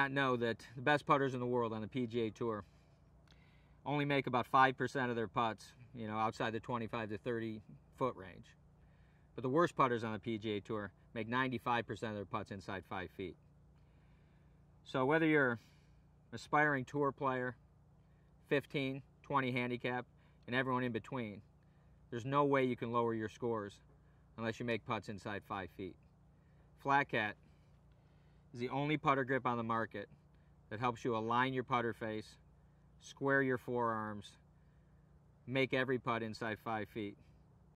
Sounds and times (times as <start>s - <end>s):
Speech: 0.0s - 2.7s, 3.8s - 8.6s, 9.4s - 13.4s, 14.8s - 15.7s, 16.3s - 17.6s, 18.4s - 21.5s, 22.1s - 23.8s, 24.4s - 26.0s, 26.8s - 27.4s, 28.5s - 32.4s, 33.0s - 34.4s, 35.5s - 37.3s.